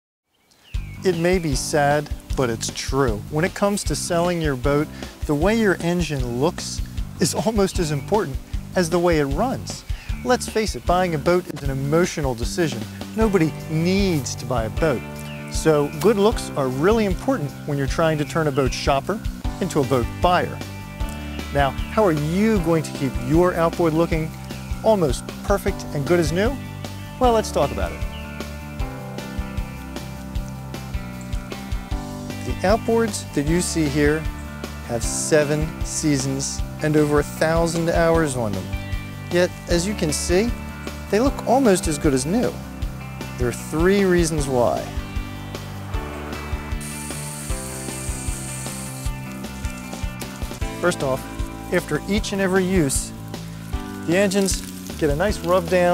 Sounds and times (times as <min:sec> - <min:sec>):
Music: 0:00.5 - 0:55.9
Speech: 0:01.0 - 0:20.6, 0:21.5 - 0:26.6, 0:27.2 - 0:28.0, 0:32.5 - 0:34.3, 0:34.9 - 0:38.7, 0:39.3 - 0:42.6, 0:43.4 - 0:45.0, 0:50.8 - 0:53.1, 0:54.1 - 0:55.9.